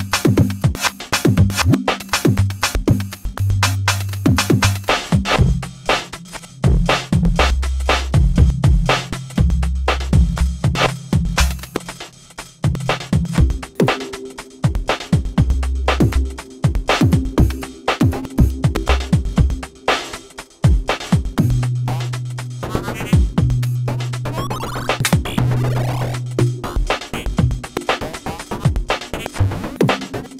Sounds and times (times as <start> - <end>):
Drum: 0.0 - 30.3
Soundtrack music: 12.7 - 30.3.